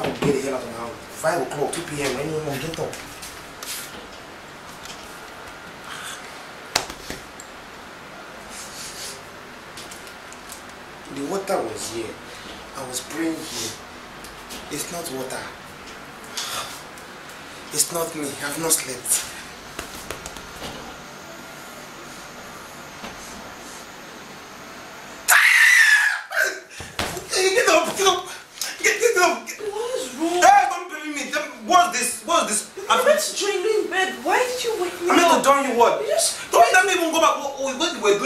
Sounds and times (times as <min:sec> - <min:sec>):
Speech: 0:00.0 - 0:03.0, 0:11.1 - 0:12.2, 0:12.8 - 0:13.8, 0:14.7 - 0:15.6, 0:17.7 - 0:19.3, 0:27.2 - 0:38.2.